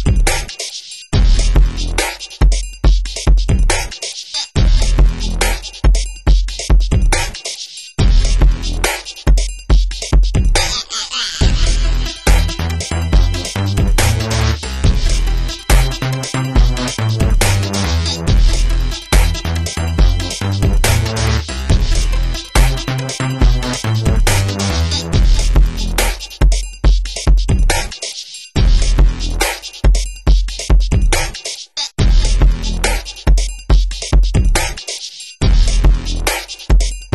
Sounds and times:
Drum machine: 0.0s - 37.1s
Hip hop music: 0.0s - 37.1s.

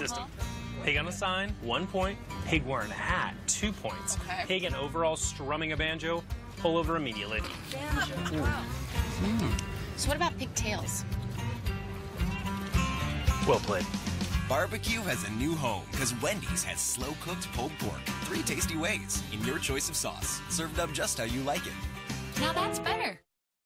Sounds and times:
Music: 0.0s - 23.3s.

